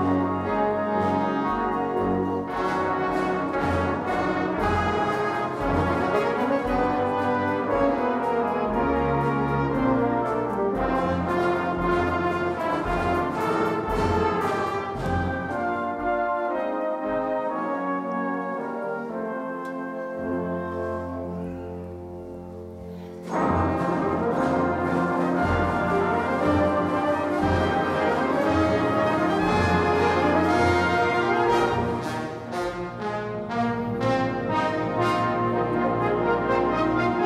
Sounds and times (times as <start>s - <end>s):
Brass instrument: 0.0s - 37.2s
Classical music: 0.0s - 37.2s
Inside, large room or hall: 0.0s - 37.2s
Orchestra: 0.0s - 37.2s.